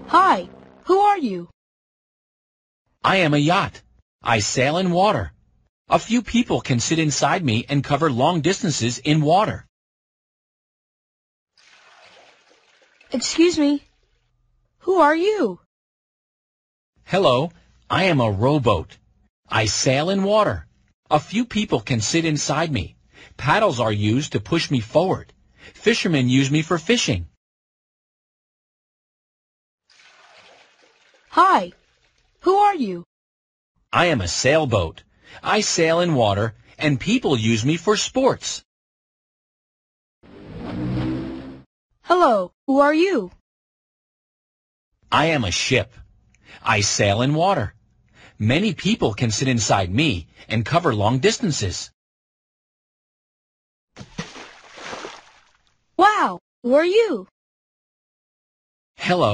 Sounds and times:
Speech: 0.1s - 1.5s, 3.0s - 9.7s, 13.2s - 13.8s, 14.9s - 15.6s, 17.1s - 27.4s, 31.4s - 31.7s, 32.5s - 33.1s, 33.9s - 38.7s, 42.1s - 43.4s, 45.1s - 46.0s, 46.6s - 47.8s, 48.4s - 52.0s, 56.0s - 57.3s, 59.0s - 59.3s.

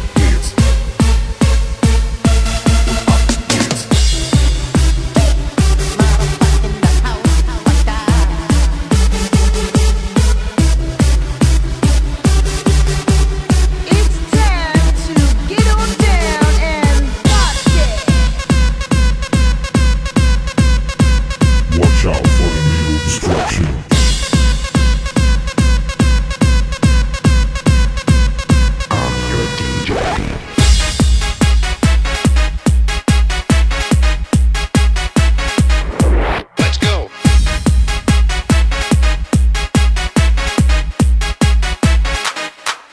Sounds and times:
Techno: 0.0s - 42.9s
Speech: 0.2s - 0.6s, 6.0s - 8.3s, 13.9s - 18.3s, 21.7s - 23.9s, 28.9s - 30.2s, 36.6s - 37.2s.

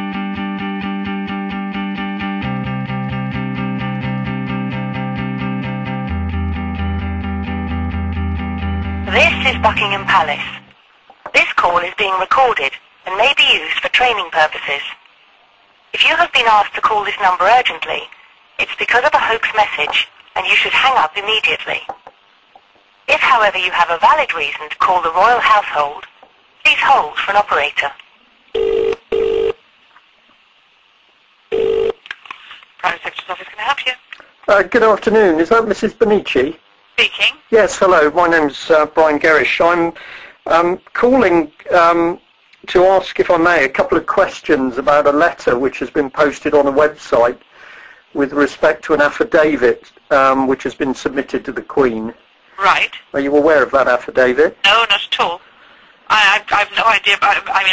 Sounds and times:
Speech: 9.1s - 10.6s, 11.4s - 15.0s, 16.0s - 21.9s, 23.1s - 26.1s, 26.7s - 28.0s, 32.8s - 47.4s, 48.2s - 55.4s, 56.1s - 57.7s.

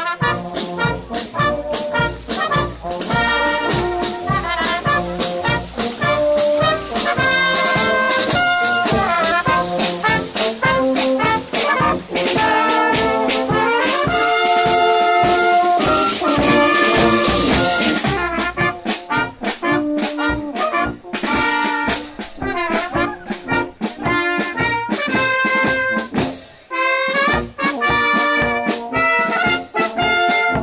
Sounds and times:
Music: 0.0s - 30.6s.

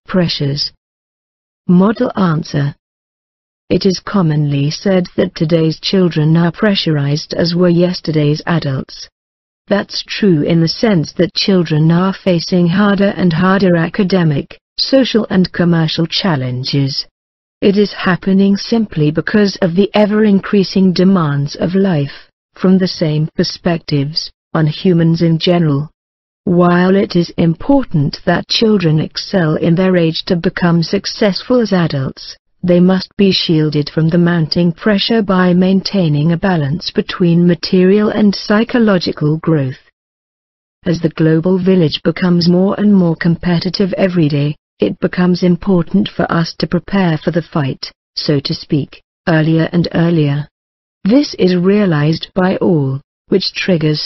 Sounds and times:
Speech: 0.0s - 0.8s, 1.7s - 2.8s, 3.7s - 9.1s, 9.7s - 39.9s, 40.8s - 50.5s, 51.1s - 54.0s.

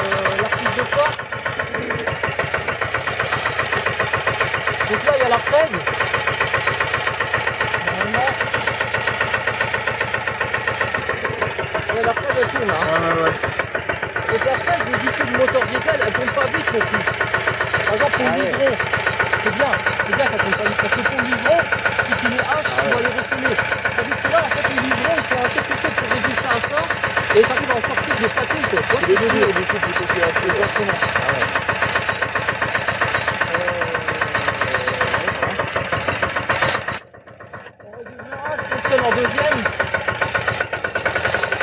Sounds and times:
Speech: 0.0s - 1.2s, 4.9s - 5.8s, 7.8s - 8.4s, 14.3s - 17.1s, 17.9s - 18.8s, 19.4s - 31.5s, 33.5s - 35.6s, 37.8s - 39.7s.

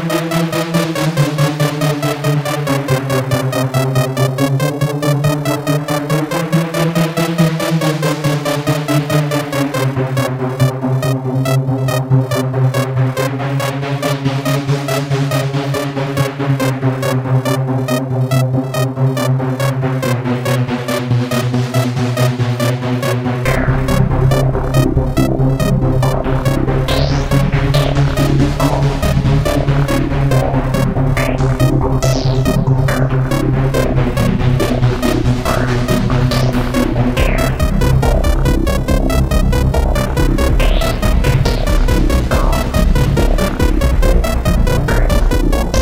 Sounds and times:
Electronic music: 0.0s - 45.8s.

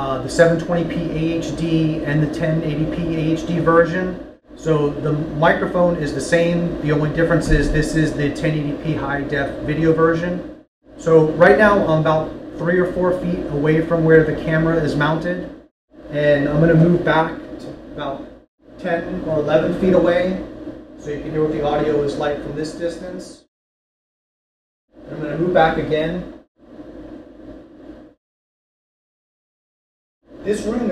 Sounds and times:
Speech: 0.0s - 23.5s, 25.1s - 26.4s, 30.4s - 30.9s.

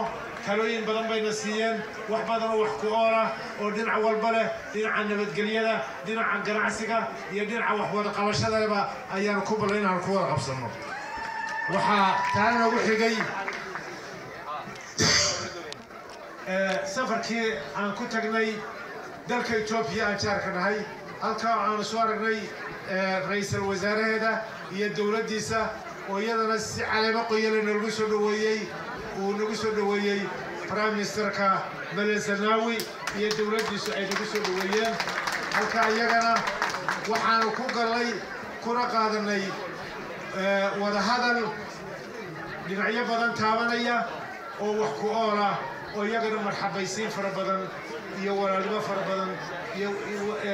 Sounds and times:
Male speech, man speaking: 0.0s - 10.8s, 11.7s - 13.6s, 16.4s - 18.7s, 19.3s - 39.6s, 40.4s - 41.6s, 42.7s - 50.5s.

